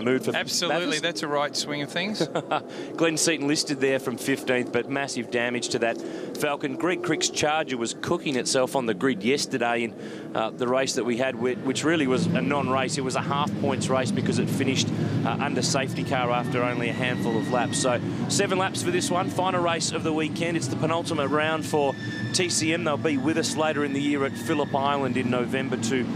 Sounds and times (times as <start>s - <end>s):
Speech: 0.0s - 2.4s, 3.0s - 26.1s
Motor vehicle (road): 0.0s - 26.1s.